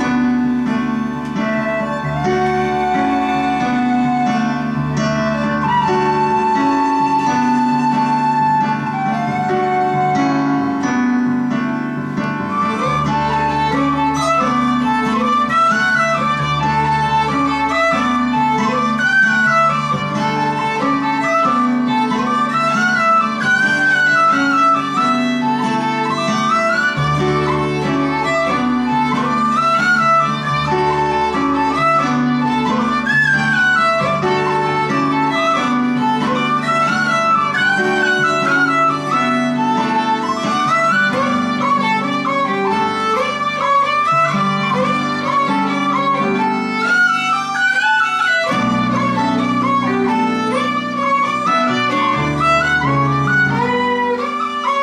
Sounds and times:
Soul music: 0:00.0 - 0:54.8.

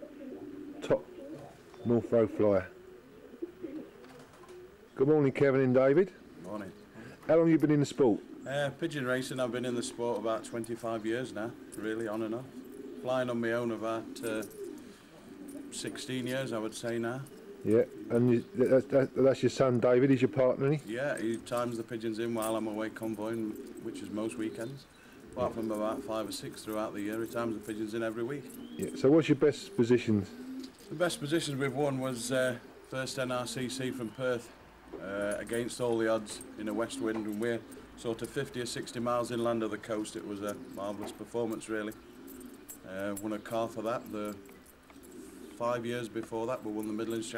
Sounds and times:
Speech: 0:01.8 - 0:02.7, 0:05.0 - 0:12.5, 0:15.8 - 0:24.8, 0:25.4 - 0:30.3, 0:30.9 - 0:42.0, 0:42.9 - 0:44.4, 0:45.6 - 0:47.3.

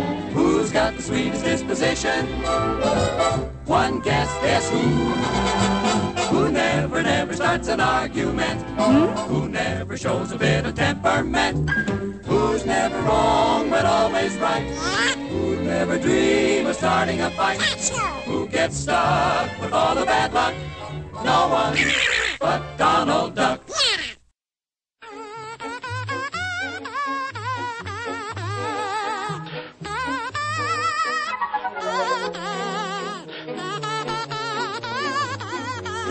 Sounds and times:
Music: 0:00.0 - 0:21.8, 0:22.4 - 0:23.6, 0:25.0 - 0:36.1.

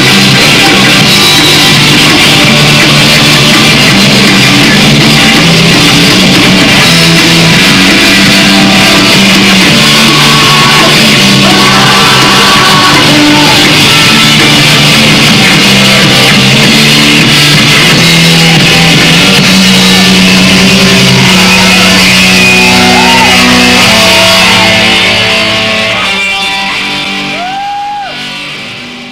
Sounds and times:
Music: 0:00.0 - 0:29.1.

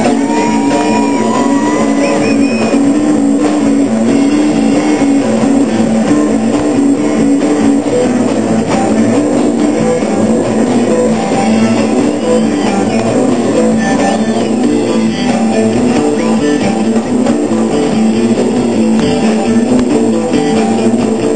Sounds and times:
Guitar: 0:00.0 - 0:21.3
Progressive rock: 0:00.0 - 0:21.3.

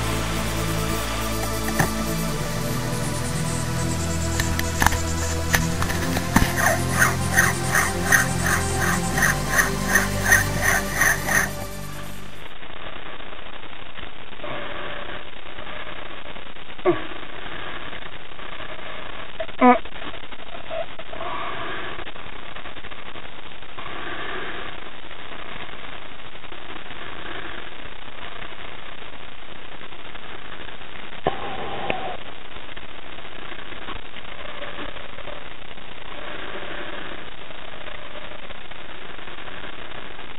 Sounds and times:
Music: 0:00.0 - 0:12.5.

